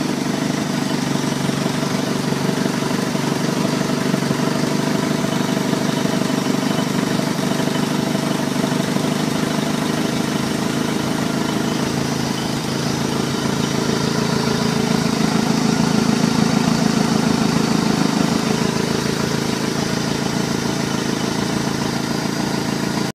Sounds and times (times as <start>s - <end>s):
Heavy engine (low frequency): 0.0s - 23.1s
Idling: 0.0s - 23.1s.